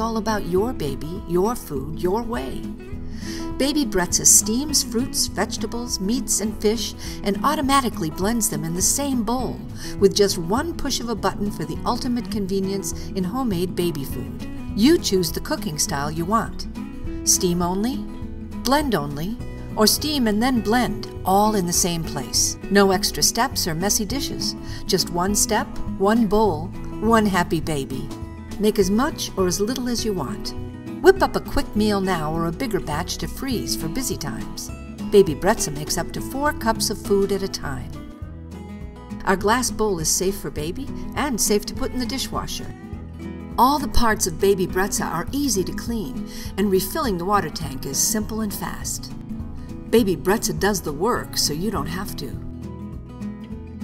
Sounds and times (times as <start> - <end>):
Speech: 0.0 - 2.7, 3.6 - 16.6, 17.3 - 18.1, 18.7 - 38.0, 39.2 - 42.8, 43.6 - 49.2, 49.9 - 52.5
Music: 0.0 - 53.8.